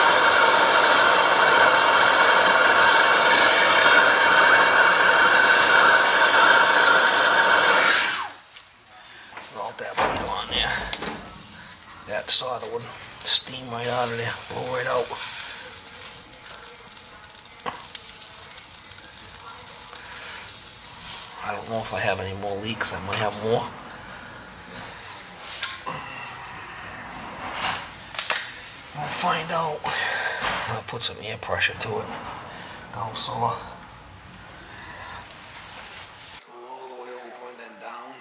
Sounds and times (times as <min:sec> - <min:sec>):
Sizzle: 0:00.0 - 0:27.1, 0:27.7 - 0:36.4.